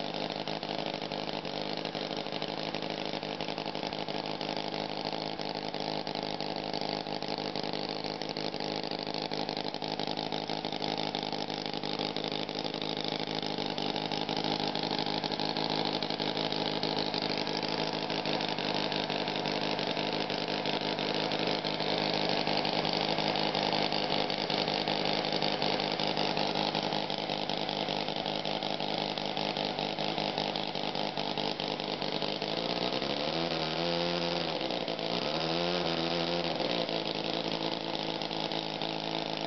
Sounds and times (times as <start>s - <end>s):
Idling: 0.0s - 39.4s
Medium engine (mid frequency): 0.0s - 39.4s.